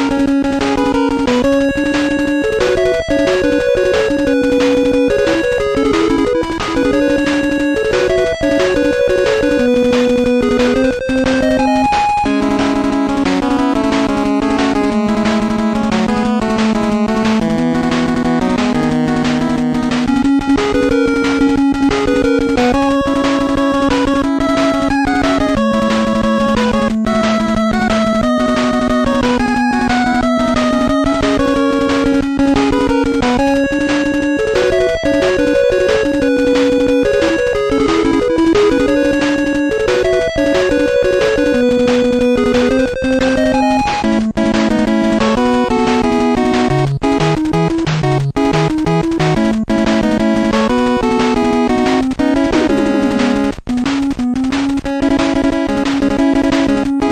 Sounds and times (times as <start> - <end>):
Music: 0.0 - 57.1.